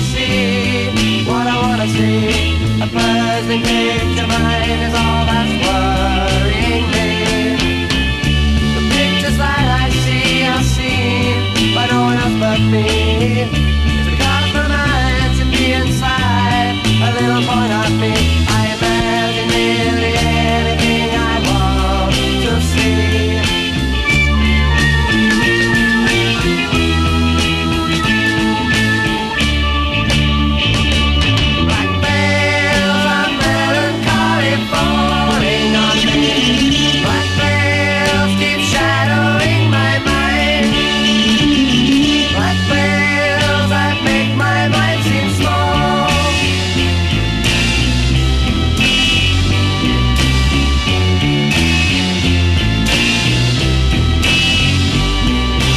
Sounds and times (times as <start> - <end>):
Music: 0.0 - 55.7.